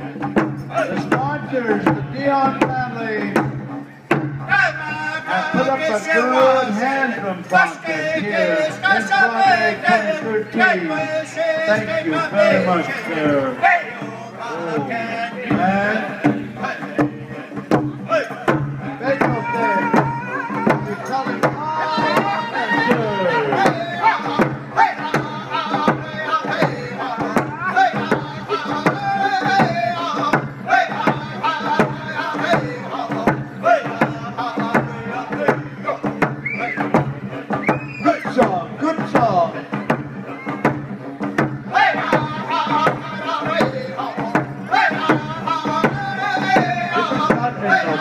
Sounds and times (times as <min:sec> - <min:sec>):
Drum kit: 0:00.0 - 0:06.8, 0:14.5 - 0:48.0
Bass drum: 0:00.0 - 0:06.9, 0:14.2 - 0:48.0.